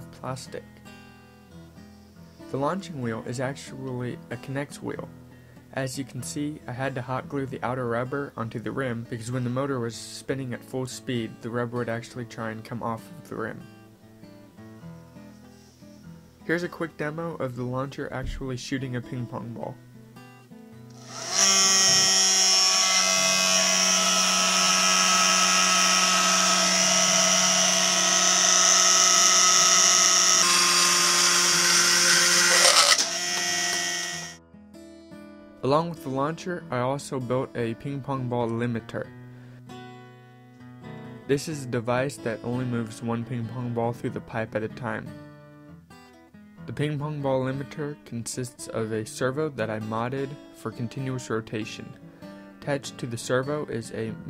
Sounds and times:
Speech: 0.0s - 0.7s, 2.5s - 5.1s, 5.8s - 13.7s, 16.5s - 19.8s, 35.6s - 39.1s, 41.3s - 45.2s, 46.7s - 52.0s, 52.6s - 54.2s
Music: 0.0s - 30.4s, 31.4s - 54.2s.

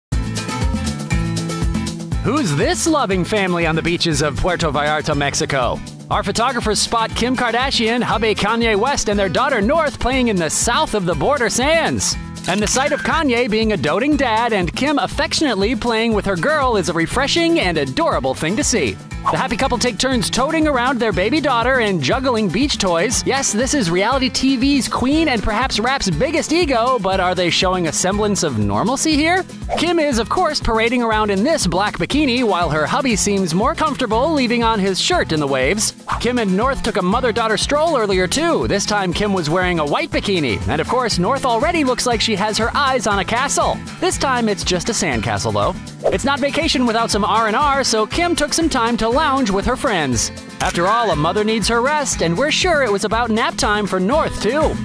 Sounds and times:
Music: 0.1s - 54.8s
Speech: 2.3s - 54.8s.

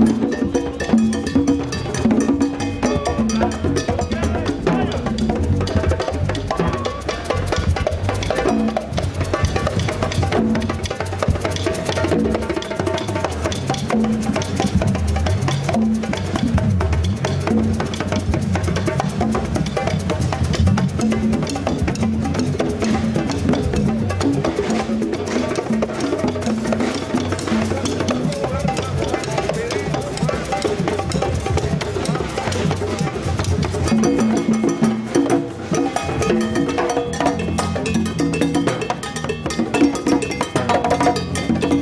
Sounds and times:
Drum: 0.0s - 41.8s.

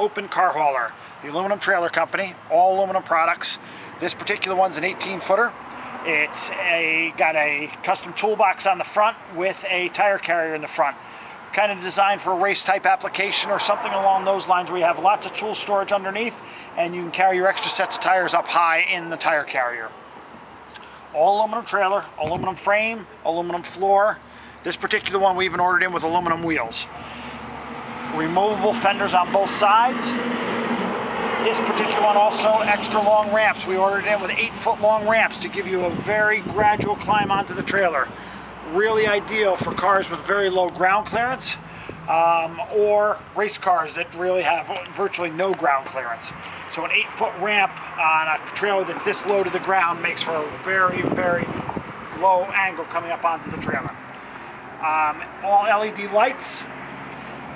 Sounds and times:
Speech: 0.0s - 19.9s, 21.2s - 27.0s, 28.1s - 30.2s, 31.4s - 38.1s, 38.7s - 51.6s, 52.2s - 54.0s, 54.8s - 56.7s
Motor vehicle (road): 0.0s - 57.5s.

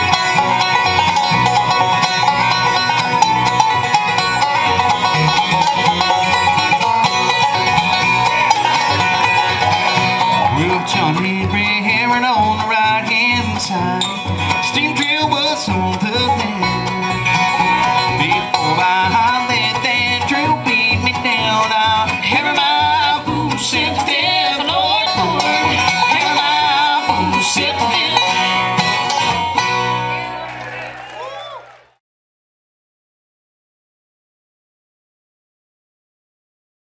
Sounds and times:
Guitar: 0.0s - 31.3s.

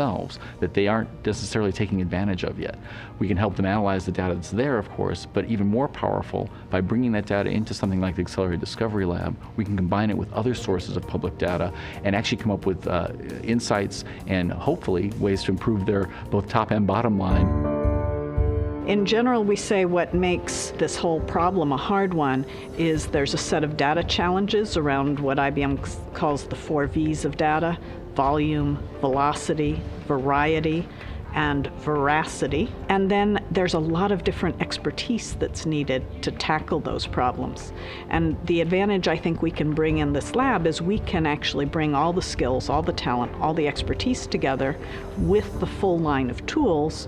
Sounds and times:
Speech: 0.0s - 17.5s
Music: 0.0s - 47.0s.

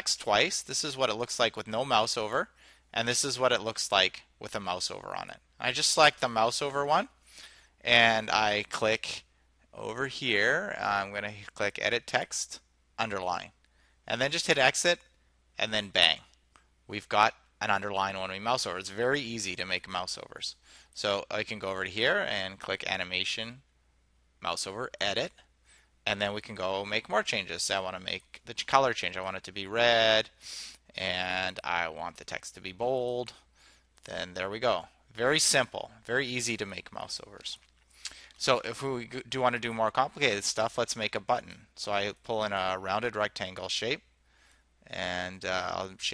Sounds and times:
Speech: 0.0s - 7.2s, 7.8s - 16.3s, 16.9s - 23.6s, 24.4s - 25.4s, 26.1s - 33.4s, 34.0s - 37.6s, 38.4s - 44.1s, 44.9s - 46.1s.

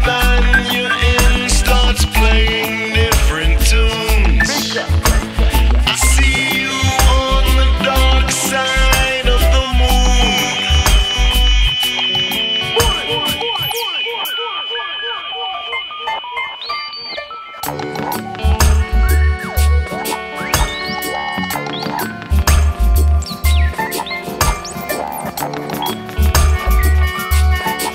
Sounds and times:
Reggae: 0.0s - 27.9s.

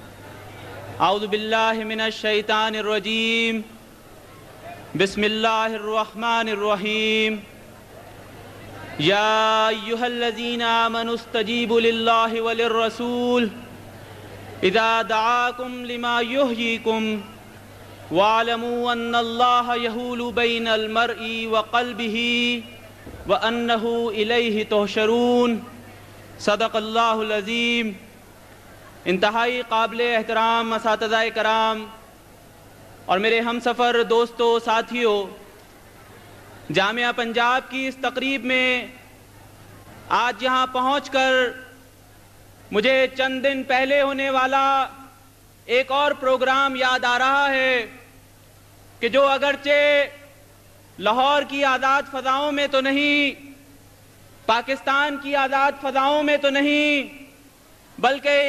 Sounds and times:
Narration, monologue: 0.1s - 58.4s
Male speech, man speaking: 1.0s - 3.8s, 4.6s - 7.5s, 8.9s - 13.7s, 14.6s - 17.4s, 18.1s - 25.8s, 26.4s - 28.1s, 29.1s - 32.0s, 33.1s - 35.4s, 36.7s - 39.0s, 40.1s - 41.8s, 42.7s - 48.1s, 49.0s - 50.3s, 51.0s - 53.6s, 54.5s - 57.3s, 58.0s - 58.4s.

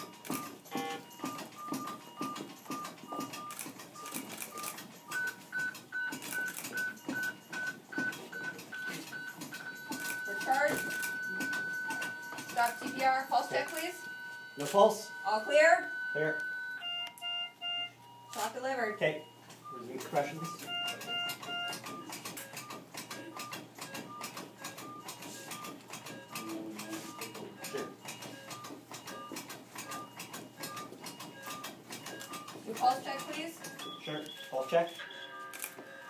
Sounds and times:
Beep, bleep: 0.3s - 24.3s, 24.9s - 35.5s.

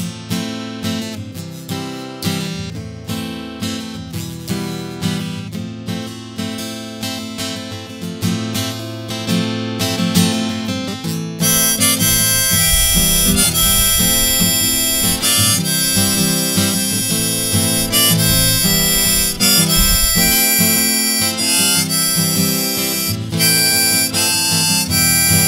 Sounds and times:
Acoustic guitar: 0.0s - 25.4s.

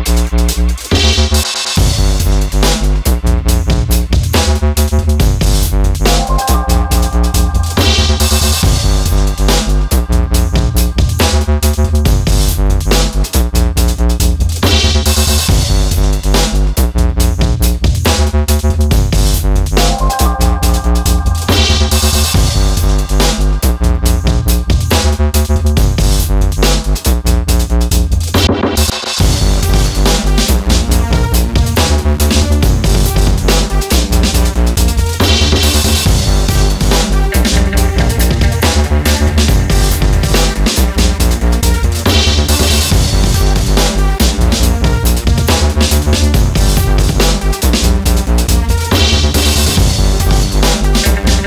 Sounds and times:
Music: 0.0s - 51.4s.

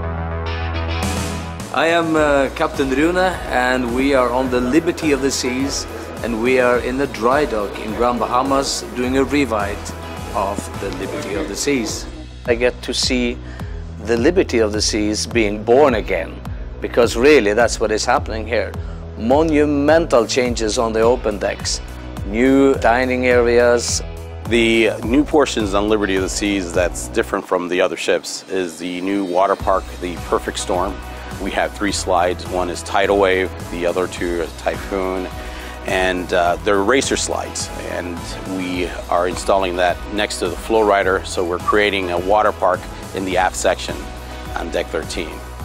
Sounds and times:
Music: 0.0s - 45.6s
Speech: 1.7s - 13.4s, 14.0s - 45.4s.

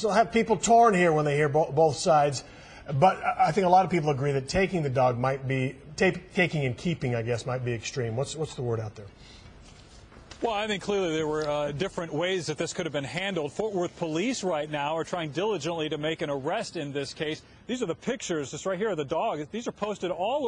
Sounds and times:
Speech: 0.0s - 9.1s, 10.4s - 20.4s.

